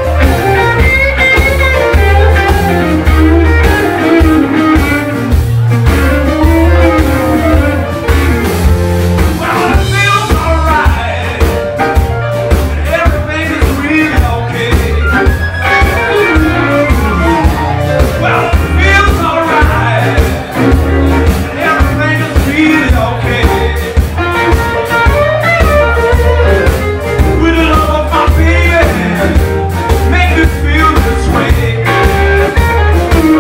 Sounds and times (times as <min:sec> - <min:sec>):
Electric guitar: 0:00.0 - 0:33.4.